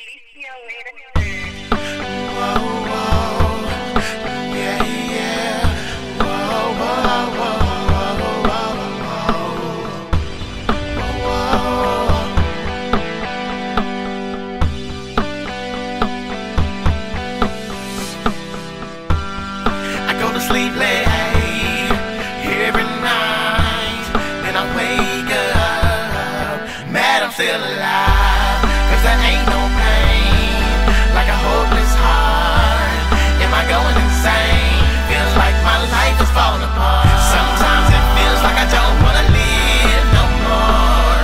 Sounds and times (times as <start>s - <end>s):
Independent music: 0.0s - 41.2s.